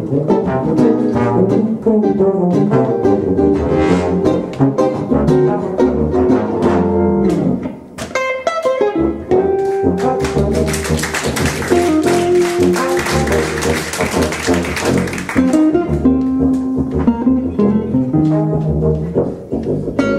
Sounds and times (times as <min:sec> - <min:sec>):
Trombone: 0:00.0 - 0:07.6, 0:08.8 - 0:20.1.